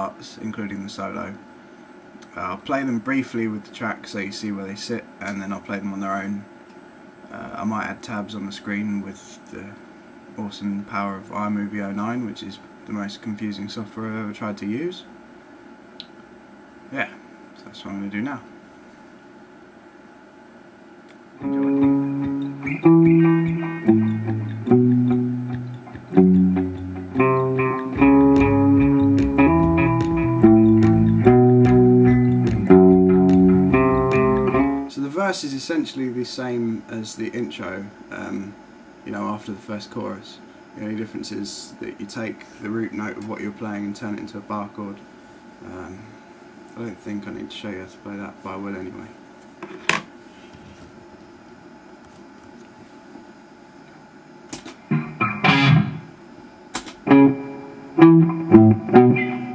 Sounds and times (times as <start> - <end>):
Speech: 0.0 - 1.4, 2.2 - 6.5, 7.3 - 9.8, 10.4 - 15.2, 16.9 - 18.5, 34.9 - 45.0, 45.6 - 49.2
Guitar: 21.4 - 35.0, 54.5 - 59.5.